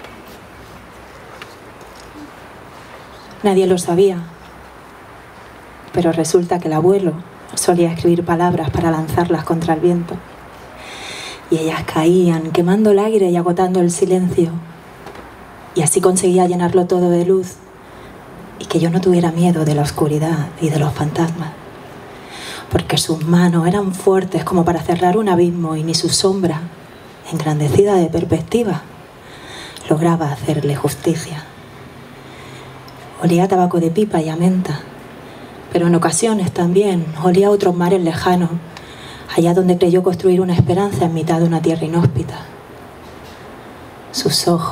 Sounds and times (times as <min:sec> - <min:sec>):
Speech: 0:03.3 - 0:04.4, 0:05.9 - 0:10.2, 0:11.5 - 0:14.7, 0:15.8 - 0:17.6, 0:18.6 - 0:21.6, 0:22.7 - 0:28.9, 0:29.8 - 0:31.5, 0:33.2 - 0:34.9, 0:35.7 - 0:38.7, 0:39.3 - 0:42.6, 0:44.1 - 0:44.7.